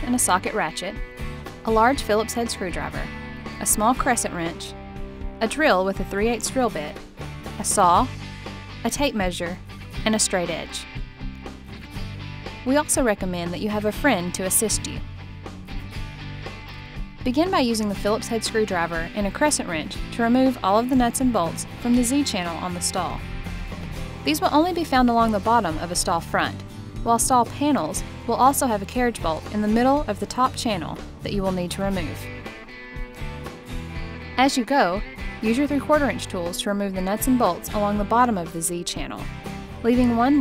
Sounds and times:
Speech: 0:00.0 - 0:01.0, 0:01.7 - 0:04.8, 0:05.4 - 0:07.0, 0:07.6 - 0:08.1, 0:08.9 - 0:10.9, 0:12.7 - 0:15.0, 0:17.2 - 0:23.2, 0:24.3 - 0:32.3, 0:34.4 - 0:40.4
Music: 0:00.0 - 0:40.4.

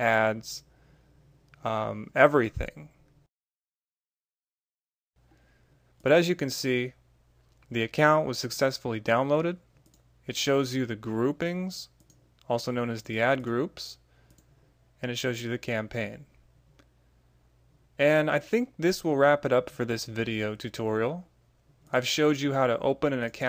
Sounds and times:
Speech: 0:00.0 - 0:00.7, 0:01.6 - 0:03.0, 0:06.0 - 0:07.0, 0:07.7 - 0:09.6, 0:10.3 - 0:14.0, 0:15.0 - 0:16.4, 0:18.0 - 0:21.3, 0:21.9 - 0:23.4
Clicking: 0:09.8 - 0:10.1, 0:12.0 - 0:12.5, 0:14.3 - 0:14.5.

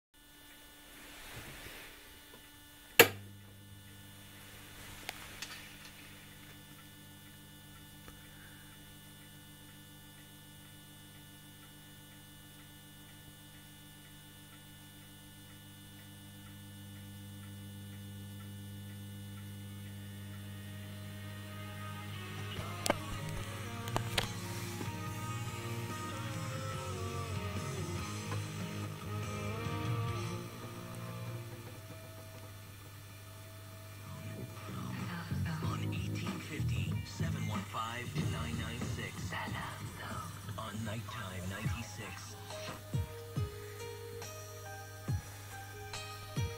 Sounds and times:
Music: 0:19.8 - 0:46.5
Radio: 0:21.5 - 0:32.5, 0:34.0 - 0:43.0
Speech: 0:34.1 - 0:42.8.

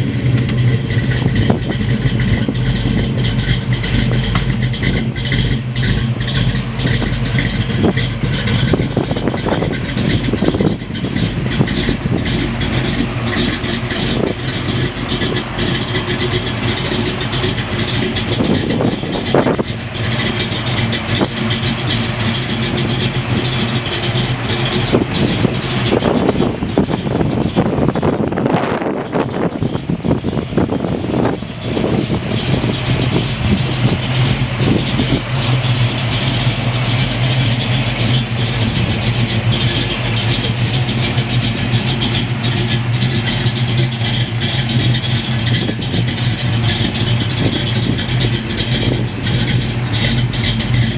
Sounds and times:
Car: 0:00.0 - 0:50.9.

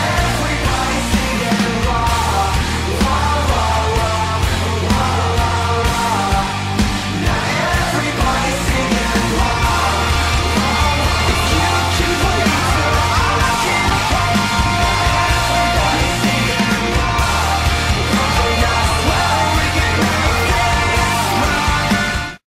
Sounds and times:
Male singing: 0:00.0 - 0:22.4
Music: 0:00.0 - 0:22.4.

